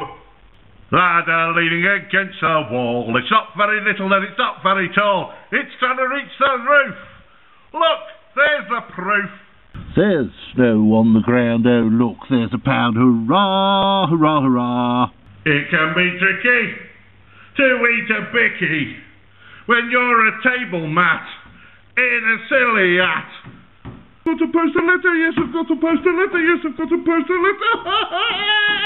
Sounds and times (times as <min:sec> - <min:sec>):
Speech: 0:00.9 - 0:07.1, 0:07.8 - 0:16.9, 0:17.6 - 0:23.5, 0:24.3 - 0:27.6.